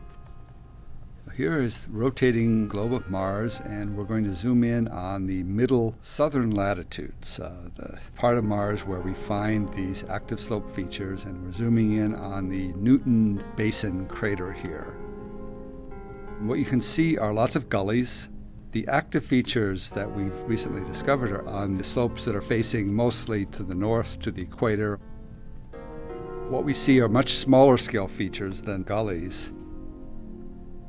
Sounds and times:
Music: 0.0 - 30.8
Speech: 1.3 - 15.0, 16.4 - 25.0, 26.5 - 29.6.

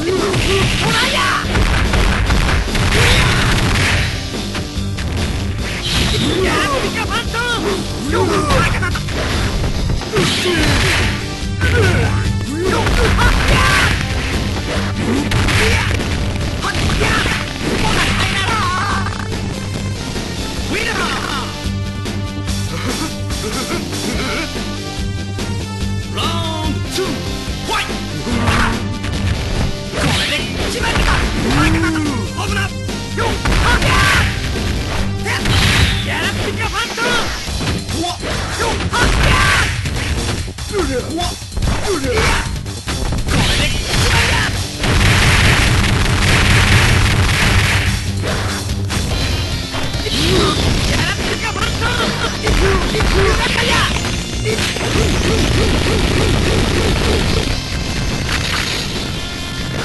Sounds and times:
Music: 0.0 - 59.8.

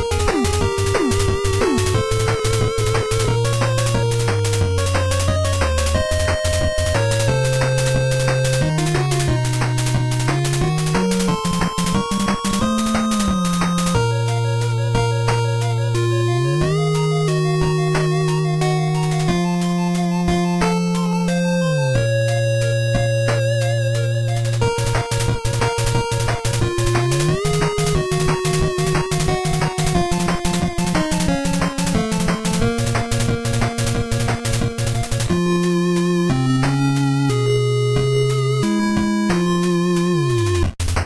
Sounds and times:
Soundtrack music: 0.0 - 41.0.

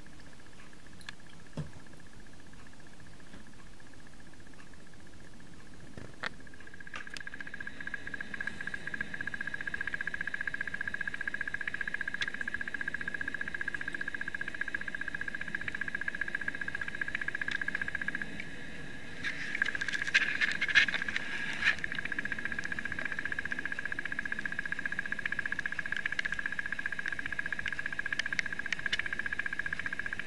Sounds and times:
Outside, rural or natural: 0.0 - 30.2.

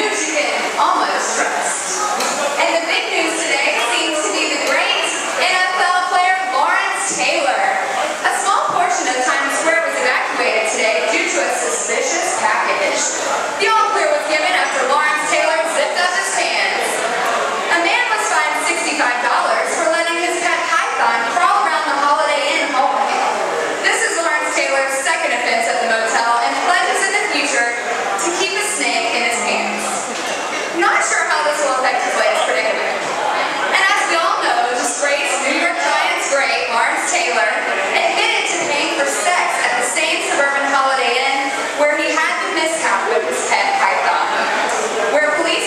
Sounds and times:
Speech: 0.0 - 45.6.

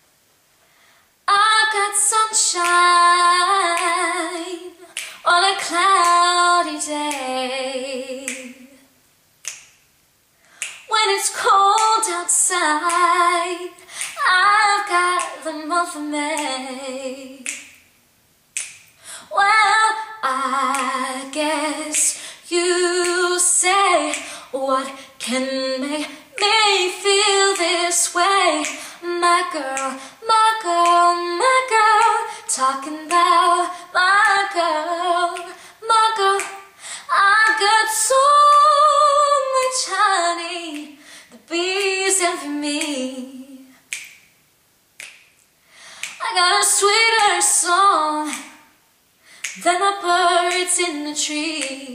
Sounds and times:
Female singing: 1.3 - 8.9, 10.9 - 17.6, 19.3 - 43.7, 46.2 - 48.7, 49.5 - 51.9.

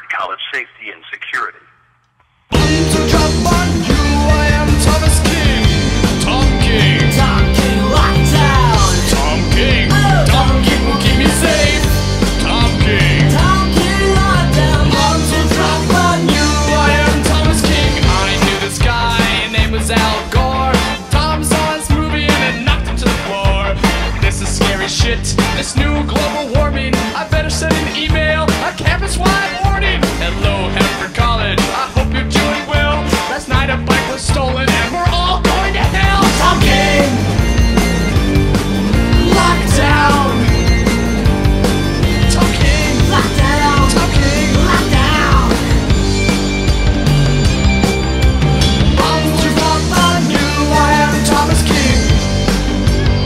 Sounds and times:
Music: 2.5 - 53.2.

